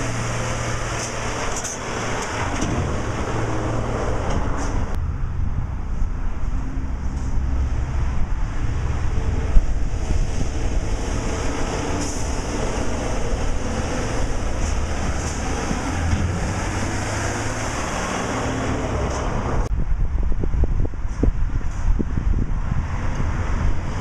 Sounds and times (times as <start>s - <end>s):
Truck: 0.0s - 24.0s.